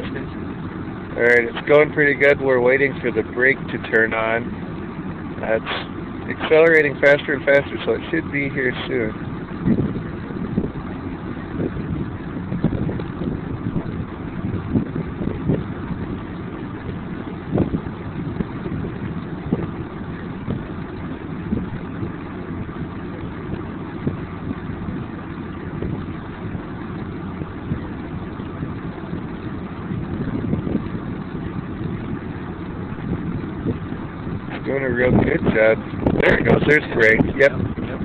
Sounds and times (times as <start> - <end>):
Wind noise (microphone): 6.3 - 38.0.